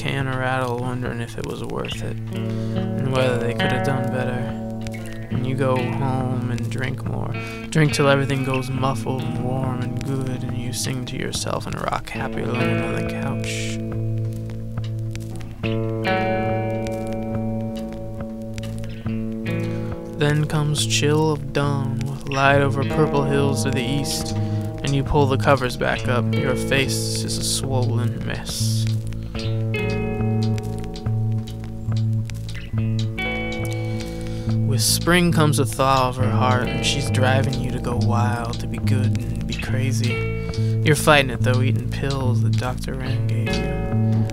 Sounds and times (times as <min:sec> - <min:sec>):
Speech: 0:00.0 - 0:02.2, 0:03.0 - 0:04.6, 0:05.3 - 0:13.8, 0:20.2 - 0:29.0, 0:34.6 - 0:43.7
Music: 0:00.0 - 0:44.3.